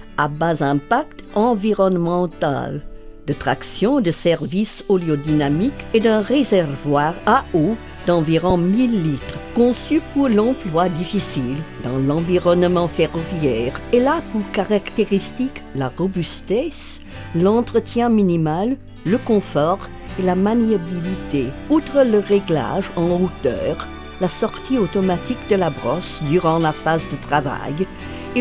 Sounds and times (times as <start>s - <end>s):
Music: 0.0s - 28.4s
Speech: 0.2s - 28.4s.